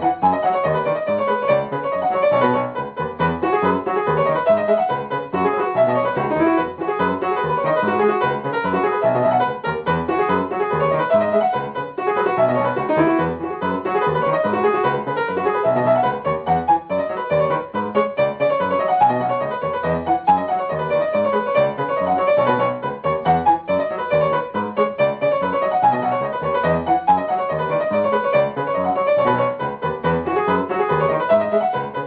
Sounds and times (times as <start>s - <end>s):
Music: 0.0s - 32.0s.